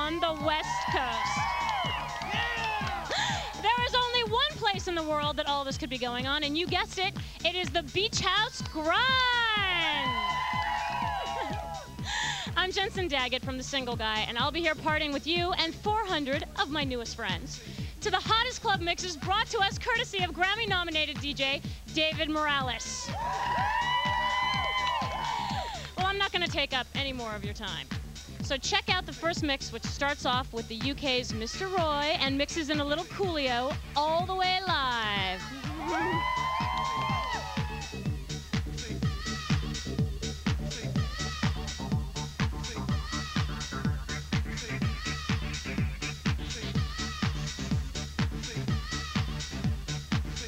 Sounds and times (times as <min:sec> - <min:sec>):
Music: 0:00.0 - 0:50.4
Speech: 0:03.6 - 0:10.1, 0:12.6 - 0:23.0, 0:26.0 - 0:27.9, 0:28.5 - 0:36.1.